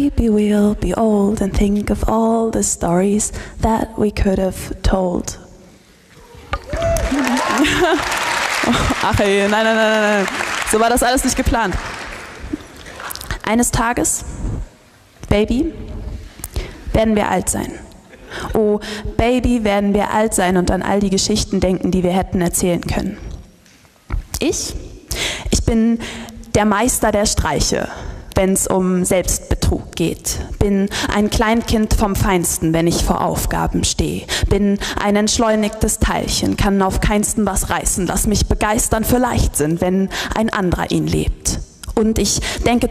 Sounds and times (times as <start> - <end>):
Speech: 0.0 - 5.4, 9.0 - 11.8, 13.4 - 14.3, 15.3 - 15.8, 16.9 - 17.8, 18.5 - 23.3, 24.4 - 24.8, 25.6 - 42.9.